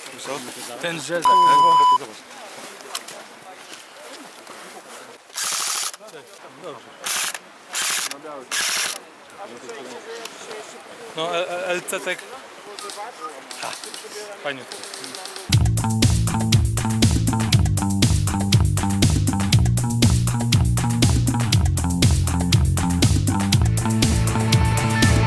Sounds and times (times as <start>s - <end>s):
Speech: 0.0s - 5.2s.